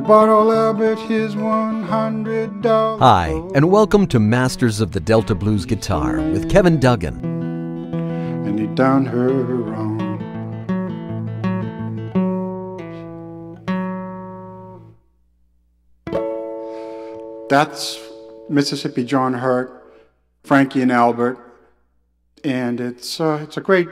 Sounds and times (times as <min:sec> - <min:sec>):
Blues: 0:00.0 - 0:14.8
Speech: 0:03.0 - 0:07.2, 0:17.5 - 0:19.8, 0:20.5 - 0:21.4, 0:22.4 - 0:23.9.